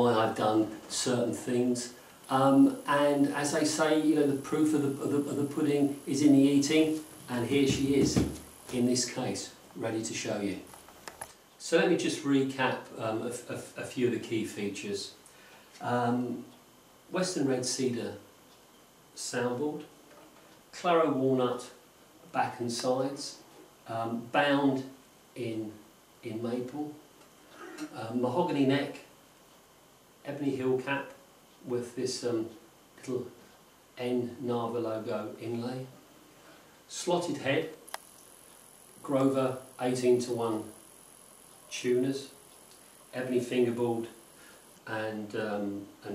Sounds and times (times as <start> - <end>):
Speech: 0.0 - 10.7, 11.6 - 15.2, 15.8 - 16.5, 17.1 - 18.3, 19.2 - 27.0, 27.6 - 29.1, 30.2 - 33.4, 34.0 - 36.0, 36.9 - 37.8, 39.0 - 40.8, 41.7 - 42.4, 43.1 - 44.2, 44.9 - 46.1.